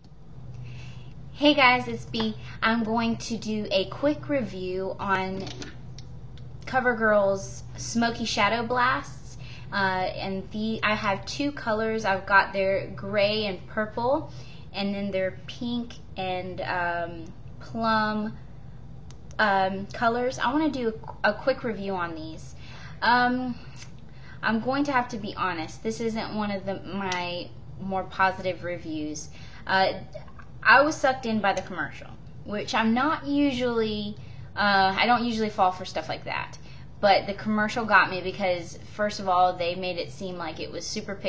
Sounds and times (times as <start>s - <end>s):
Speech: 1.4s - 5.7s, 6.7s - 18.4s, 19.4s - 23.8s, 24.4s - 41.2s.